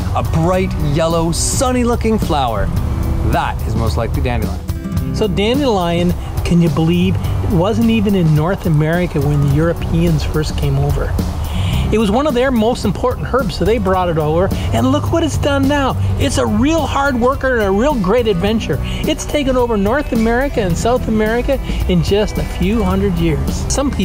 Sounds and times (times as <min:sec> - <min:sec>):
Music: 0:00.0 - 0:24.0
Speech: 0:00.2 - 0:02.7, 0:03.3 - 0:11.1, 0:11.8 - 0:24.0.